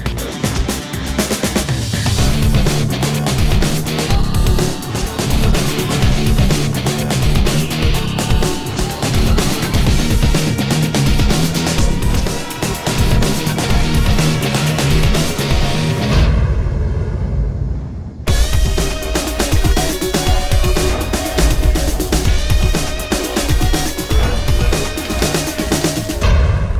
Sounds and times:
Music: 0.0 - 26.7.

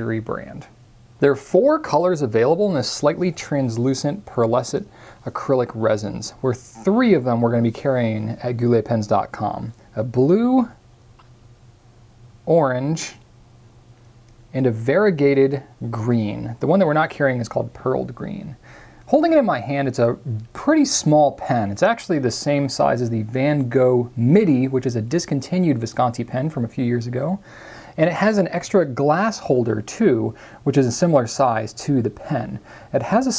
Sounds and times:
Speech: 0.0 - 10.8, 12.5 - 13.3, 14.5 - 27.4, 28.0 - 33.3.

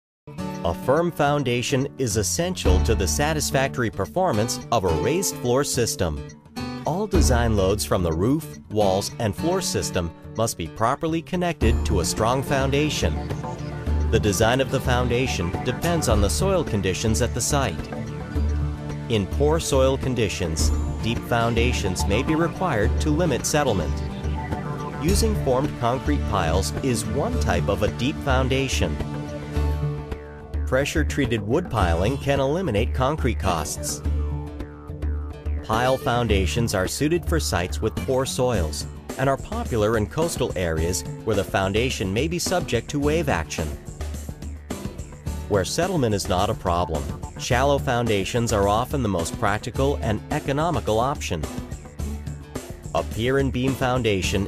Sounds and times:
Music: 0.3 - 54.4
Speech: 0.6 - 6.2, 6.9 - 13.2, 14.2 - 17.9, 19.1 - 24.0, 25.0 - 29.0, 30.7 - 34.0, 35.7 - 43.8, 45.5 - 51.5, 53.0 - 54.4.

